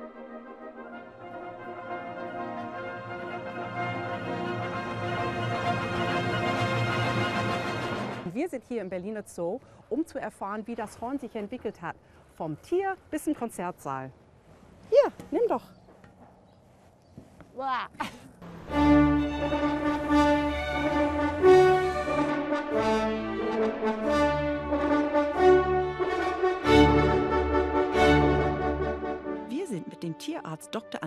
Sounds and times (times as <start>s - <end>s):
Brass instrument: 0.0s - 8.3s, 18.4s - 31.0s.